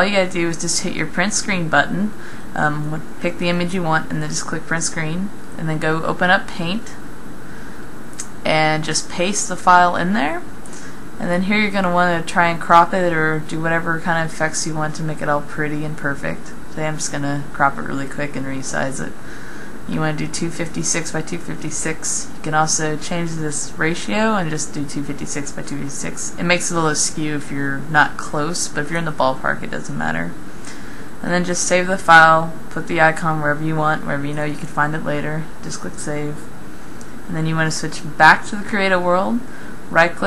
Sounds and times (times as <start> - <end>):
Speech: 0.0 - 7.0, 8.2 - 10.5, 11.2 - 19.2, 19.9 - 30.4, 31.2 - 36.5, 37.3 - 40.2.